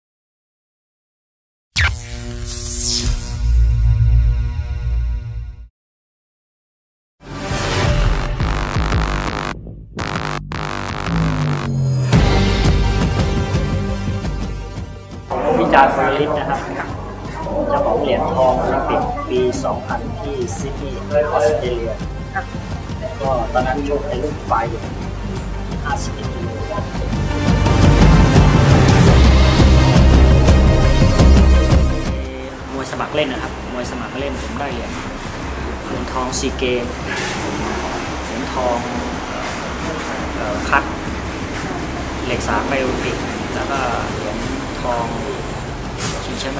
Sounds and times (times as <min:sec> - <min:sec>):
Music: 0:02.8 - 0:05.7, 0:07.2 - 0:46.5.